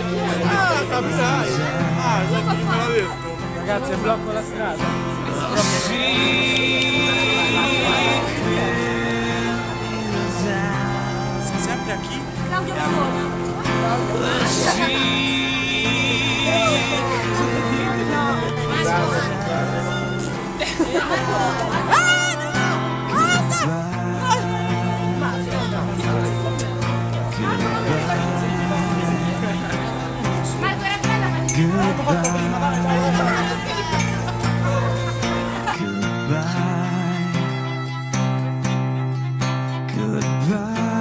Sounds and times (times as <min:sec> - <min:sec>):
Music: 0:00.0 - 0:41.0.